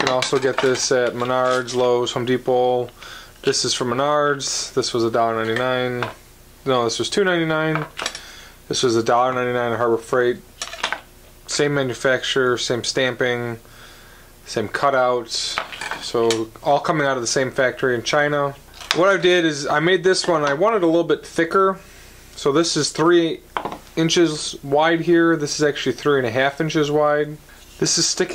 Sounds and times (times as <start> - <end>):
Speech: 0.0 - 8.0, 8.7 - 10.5, 11.5 - 13.6, 14.4 - 21.8, 22.4 - 28.3.